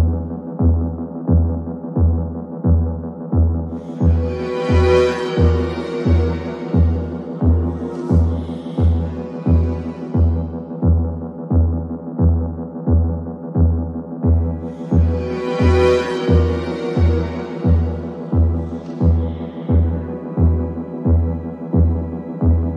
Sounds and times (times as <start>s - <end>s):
Throbbing: 0.0s - 22.7s.